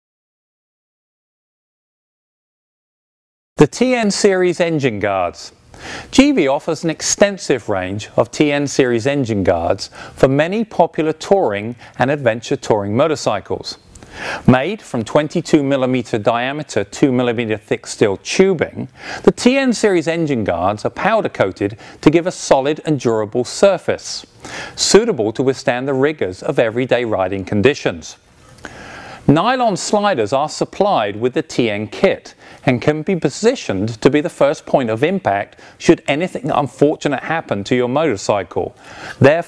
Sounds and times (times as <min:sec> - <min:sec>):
Speech: 0:03.6 - 0:13.8, 0:14.5 - 0:28.2, 0:29.3 - 0:39.4.